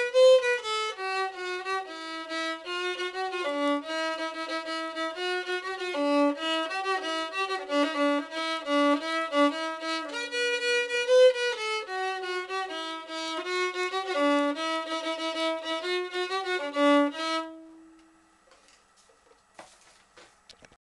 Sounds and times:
Violin, fiddle: 0.0s - 17.8s.

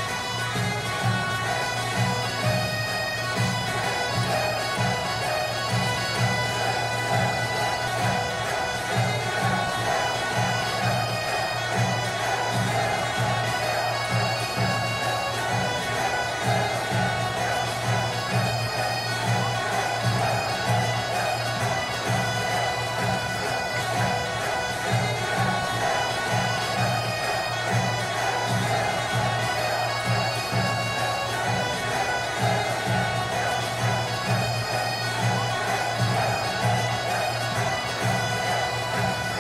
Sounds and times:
Bagpipes: 0.0s - 39.4s.

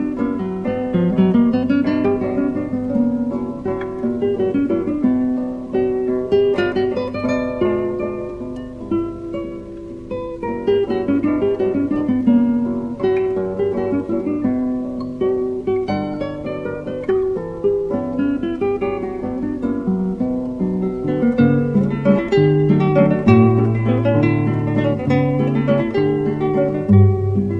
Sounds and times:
Strum: 0.0s - 27.5s.

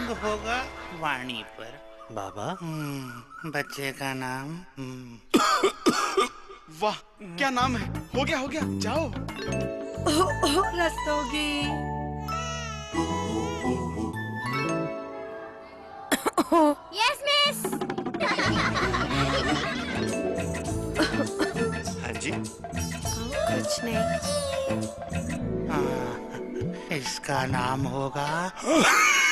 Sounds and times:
Music: 0.0s - 2.1s, 7.6s - 16.1s, 17.6s - 28.6s.

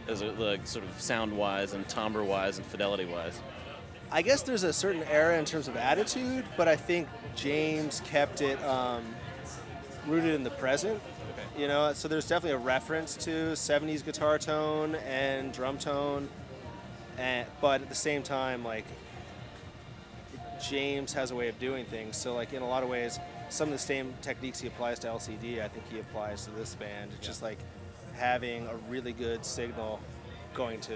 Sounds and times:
Speech: 0.0s - 16.4s, 17.1s - 19.0s, 20.3s - 30.9s
Music: 0.0s - 30.9s.

